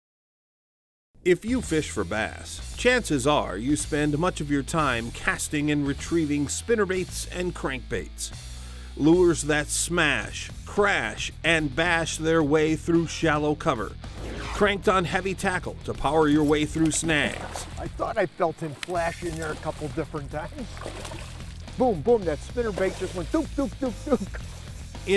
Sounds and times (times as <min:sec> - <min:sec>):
Speech: 0:01.3 - 0:08.4, 0:09.0 - 0:14.0, 0:14.6 - 0:20.7, 0:21.8 - 0:24.4
Music: 0:01.3 - 0:25.1.